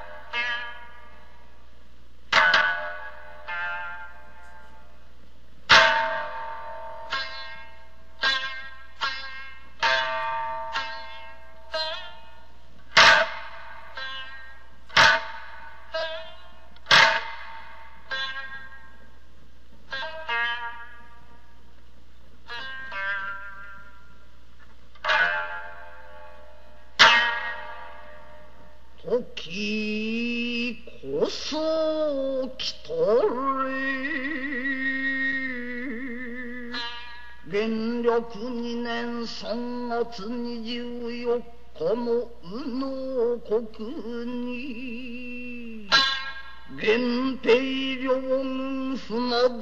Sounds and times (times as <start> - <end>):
Music: 0.0 - 49.6.